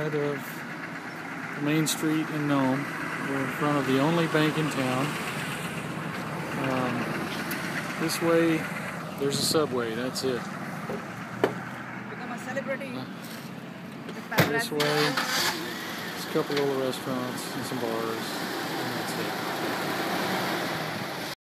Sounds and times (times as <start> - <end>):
Speech: 0.0 - 0.5, 1.6 - 5.2, 6.6 - 7.2, 8.0 - 10.4, 16.2 - 19.4
Truck: 0.0 - 21.4.